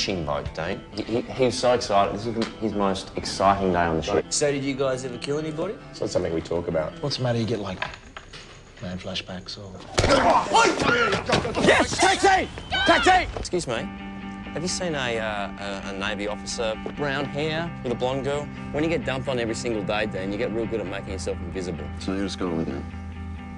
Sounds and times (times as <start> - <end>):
Music: 0.0 - 23.5.